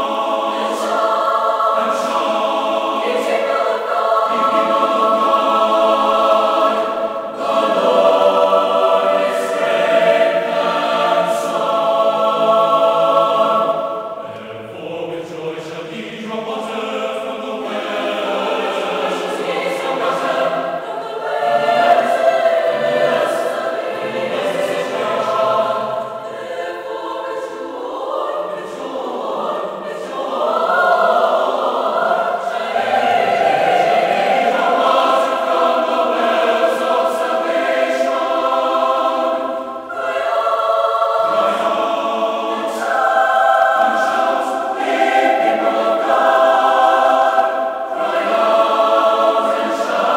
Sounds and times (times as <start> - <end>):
Music: 0.0 - 50.1.